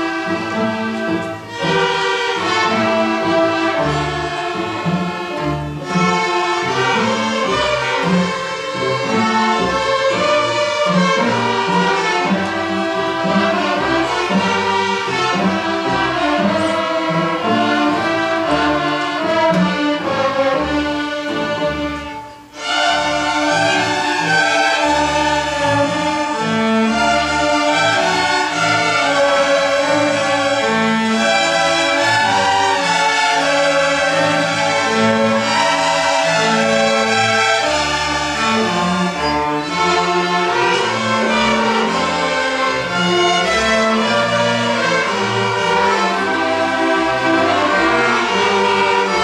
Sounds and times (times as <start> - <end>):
Orchestra: 0.0 - 49.2.